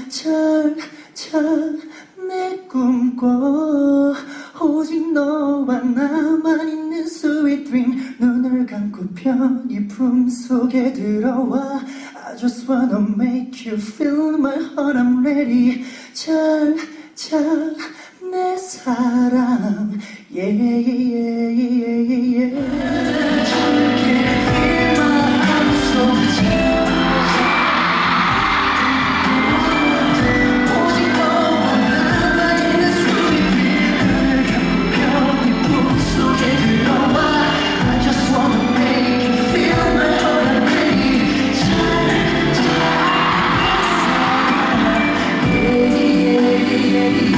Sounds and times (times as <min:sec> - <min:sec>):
Music: 0:22.6 - 0:47.3.